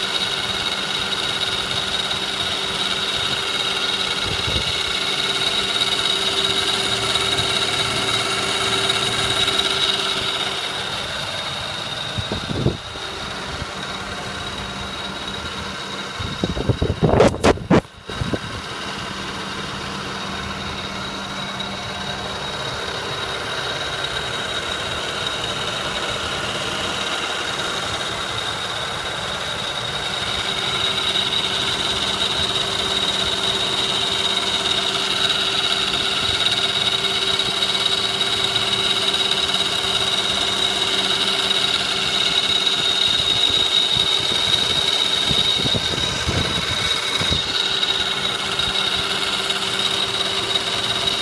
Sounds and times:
Car: 0:00.0 - 0:51.2
Engine: 0:00.0 - 0:51.2.

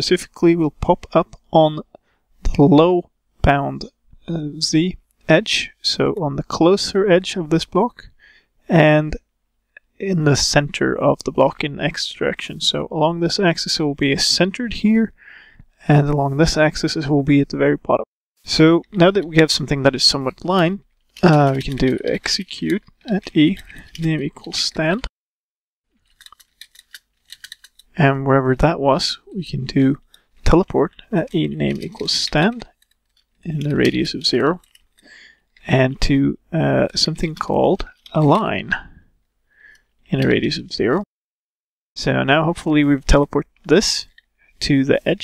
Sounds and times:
Speech: 0:00.0 - 0:08.1, 0:08.7 - 0:09.3, 0:09.9 - 0:15.2, 0:15.8 - 0:25.1, 0:28.0 - 0:32.7, 0:33.4 - 0:34.6, 0:35.6 - 0:39.0, 0:40.1 - 0:41.1, 0:42.0 - 0:45.2.

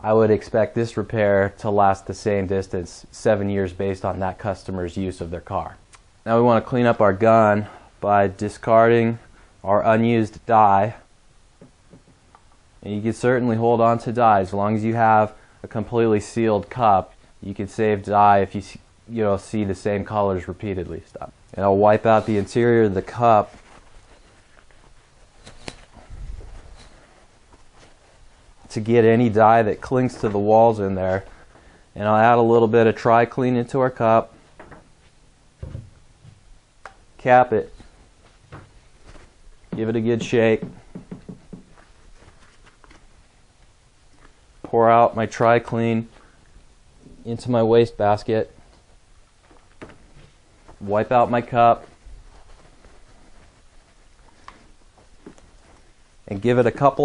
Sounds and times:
Speech: 0:00.0 - 0:11.1, 0:12.8 - 0:23.6, 0:28.7 - 0:31.3, 0:32.0 - 0:34.4, 0:37.2 - 0:37.9, 0:39.8 - 0:40.8, 0:44.7 - 0:46.2, 0:47.1 - 0:48.6, 0:50.8 - 0:52.0, 0:56.3 - 0:57.0.

